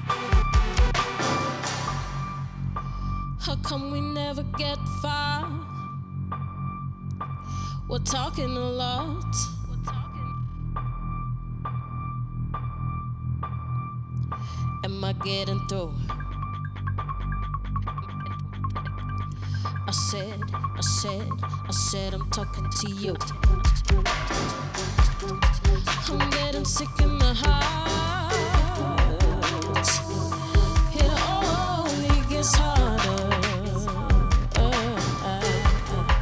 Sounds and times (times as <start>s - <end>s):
Music of Asia: 0.0s - 2.8s, 16.1s - 36.2s.